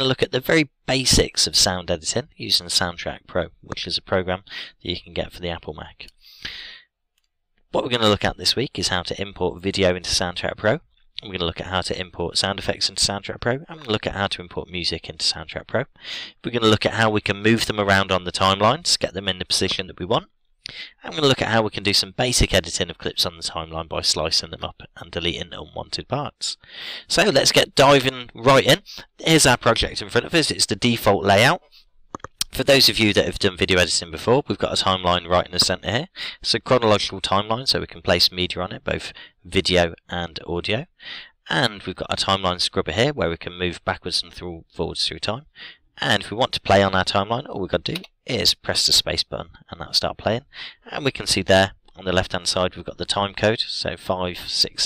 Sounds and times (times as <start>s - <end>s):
Speech: 0.0s - 6.8s, 7.7s - 54.8s.